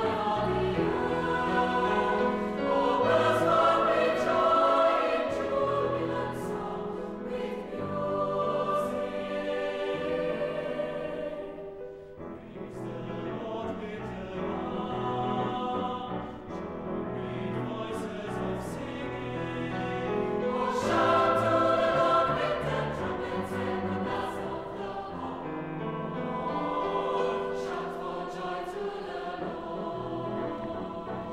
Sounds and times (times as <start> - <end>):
Music: 0.0 - 31.3.